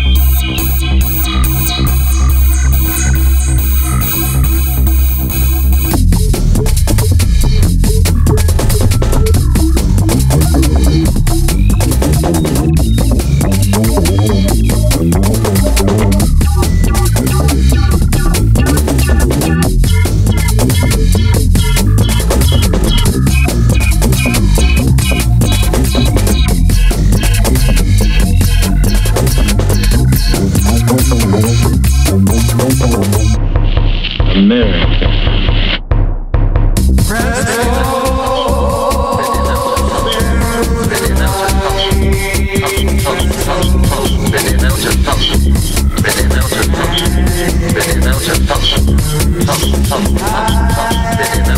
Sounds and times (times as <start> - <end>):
Sampler: 0.0 - 35.8, 37.0 - 51.5.